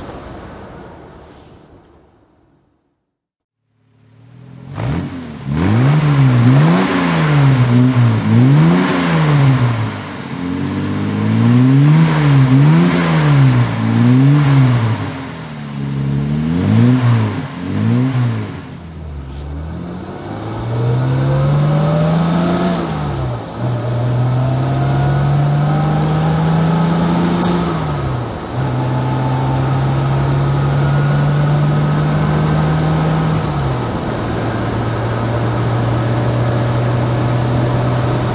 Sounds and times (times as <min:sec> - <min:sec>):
Car: 0:03.6 - 0:38.3.